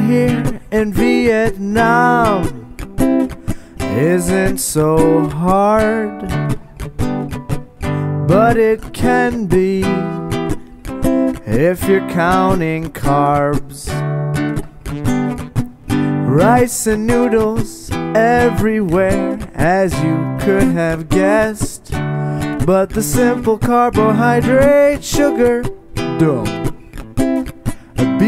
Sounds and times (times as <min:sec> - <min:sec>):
Music: 0:00.0 - 0:28.2.